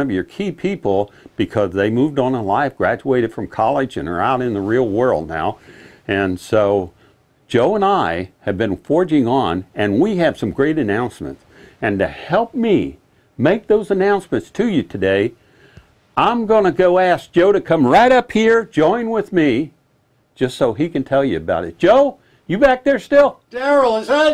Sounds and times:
Speech: 0.0s - 6.9s, 7.5s - 15.4s, 16.2s - 19.8s, 20.4s - 24.3s.

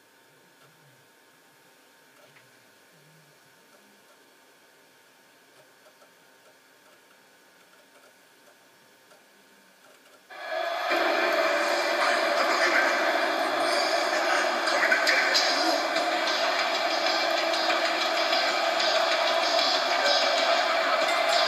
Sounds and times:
Music: 10.3s - 21.4s
Speech: 10.8s - 21.4s.

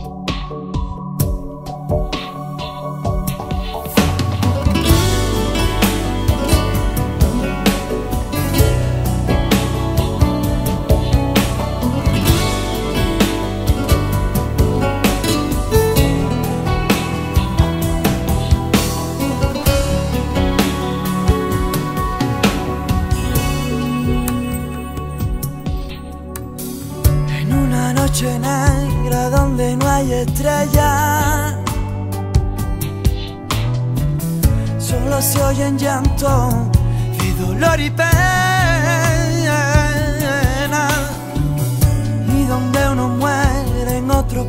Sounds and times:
Music: 0.0s - 44.4s.

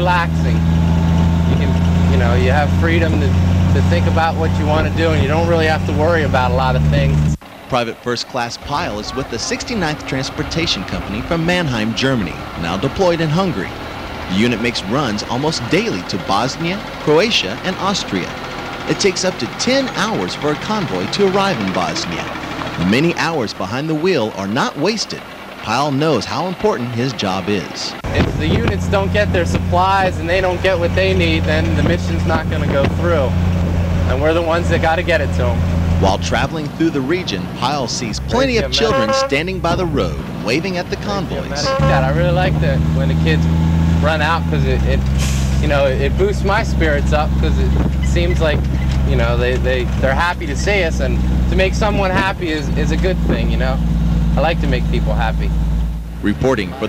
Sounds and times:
Speech: 0.0s - 0.7s, 1.5s - 33.4s, 34.1s - 53.8s, 54.4s - 55.5s, 56.2s - 56.8s
Truck: 0.0s - 56.8s.

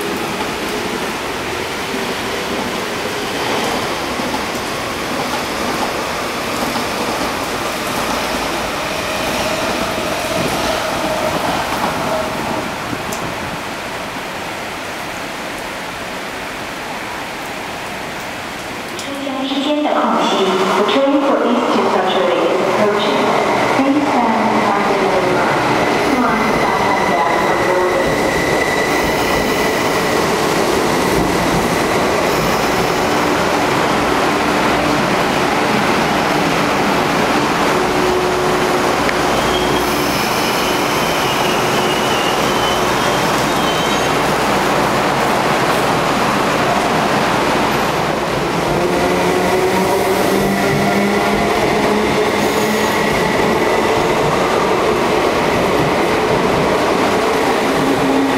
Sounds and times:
Railroad car, train wagon: 0.0s - 58.3s
Subway, metro, underground: 0.0s - 58.3s
Train: 0.0s - 58.3s.

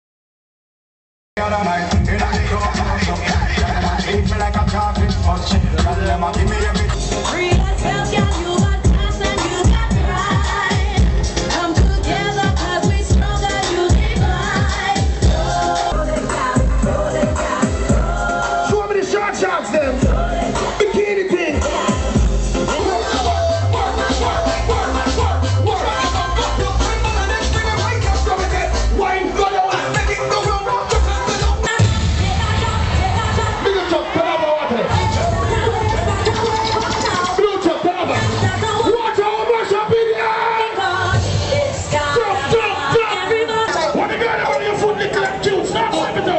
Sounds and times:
Music: 1.4s - 46.3s.

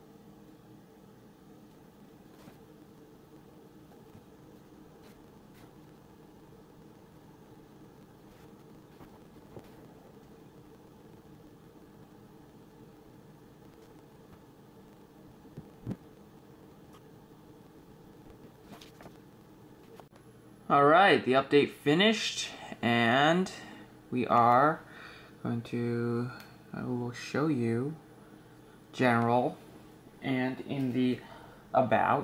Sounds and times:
Speech: 20.7s - 24.8s, 25.4s - 28.0s, 29.0s - 29.6s, 30.2s - 32.2s.

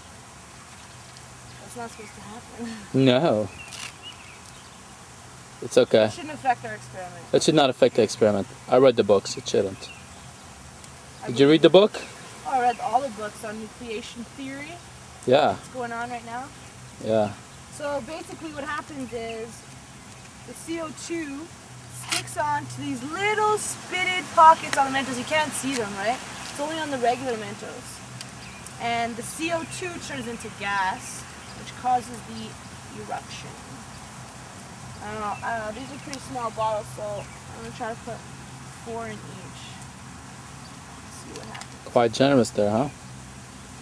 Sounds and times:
Speech: 12.5s - 19.6s.

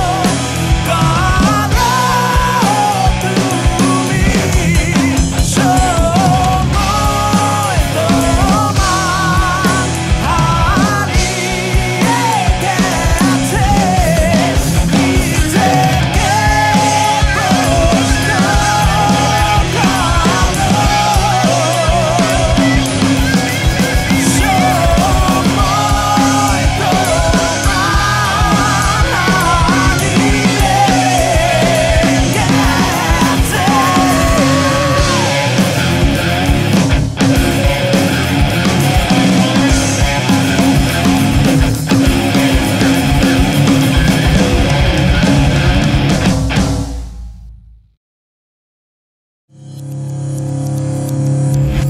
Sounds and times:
Singing: 0.0s - 35.9s
Punk rock: 0.0s - 47.6s.

